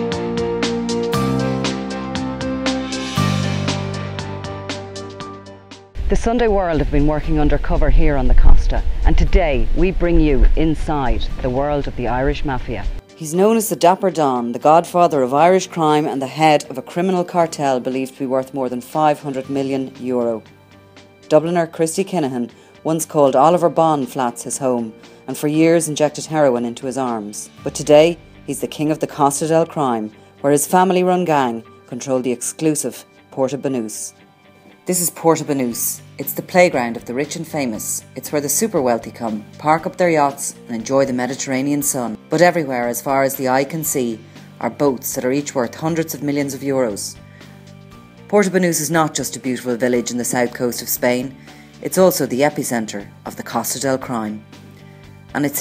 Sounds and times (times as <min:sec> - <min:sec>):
Music: 0:00.0 - 0:55.6
Speech: 0:06.1 - 0:20.4, 0:21.3 - 0:34.2, 0:34.9 - 0:47.2, 0:48.3 - 0:54.4, 0:55.3 - 0:55.6.